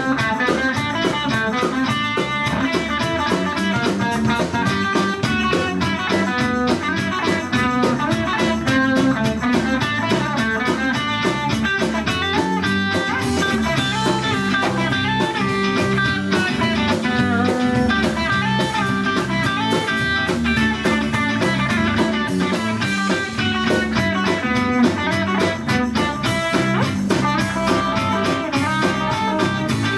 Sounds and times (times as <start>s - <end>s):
Music: 0.0s - 29.9s.